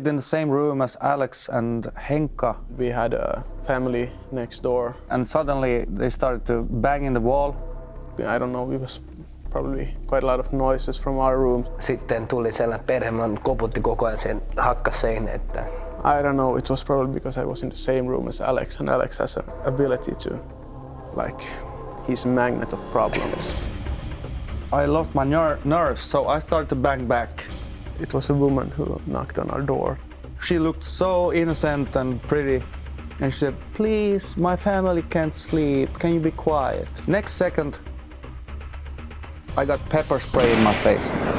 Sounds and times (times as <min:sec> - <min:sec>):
Speech: 0:00.0 - 0:07.6, 0:08.2 - 0:20.4, 0:21.1 - 0:23.6, 0:24.7 - 0:37.8, 0:39.5 - 0:41.1
Music: 0:00.0 - 0:41.3.